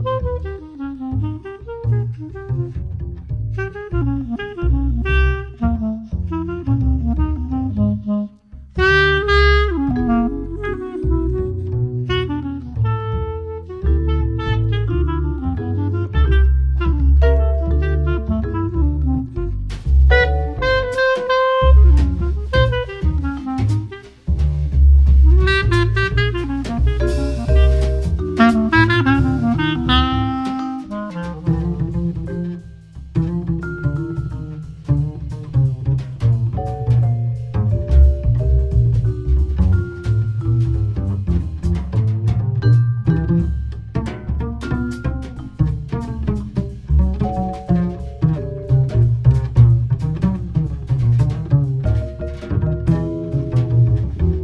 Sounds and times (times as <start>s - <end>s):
Music: 0.0s - 54.4s.